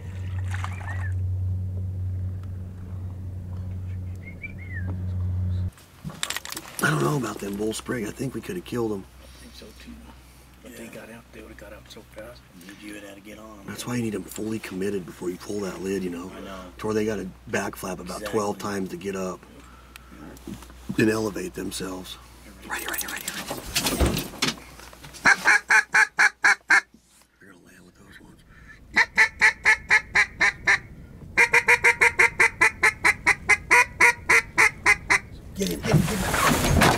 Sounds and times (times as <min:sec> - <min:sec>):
Speech: 0:06.8 - 0:10.1, 0:10.7 - 0:19.4, 0:20.2 - 0:23.4, 0:27.4 - 0:28.4, 0:35.6 - 0:36.5.